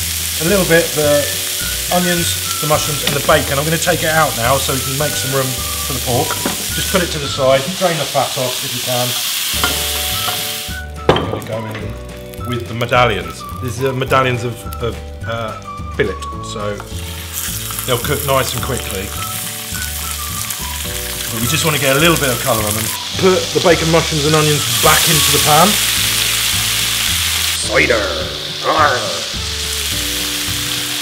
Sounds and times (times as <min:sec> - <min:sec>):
Music: 0:00.0 - 0:31.0
Speech: 0:00.4 - 0:09.2, 0:11.3 - 0:11.9, 0:12.5 - 0:16.9, 0:17.9 - 0:19.2, 0:21.3 - 0:25.8, 0:27.6 - 0:29.3.